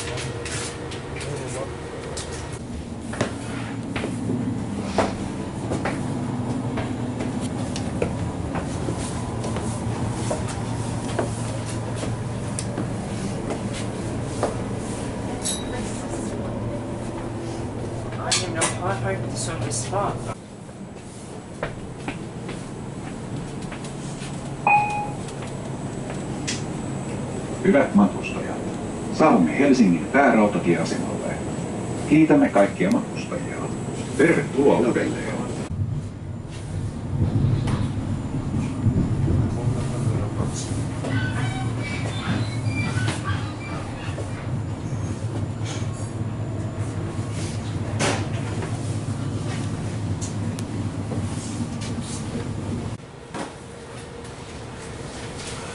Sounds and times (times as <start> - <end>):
Vehicle: 0.0 - 55.7
Speech: 1.2 - 1.8, 18.2 - 20.4, 27.6 - 31.5, 32.1 - 35.7.